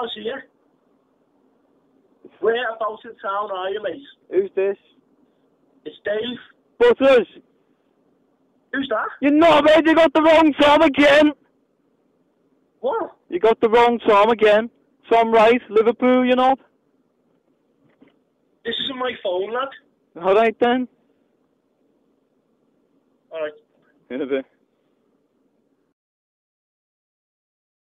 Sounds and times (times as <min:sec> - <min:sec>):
Speech: 0:00.0 - 0:00.5, 0:02.3 - 0:05.0, 0:05.8 - 0:07.4, 0:08.7 - 0:11.4, 0:12.8 - 0:16.6, 0:18.7 - 0:20.9, 0:23.3 - 0:24.5.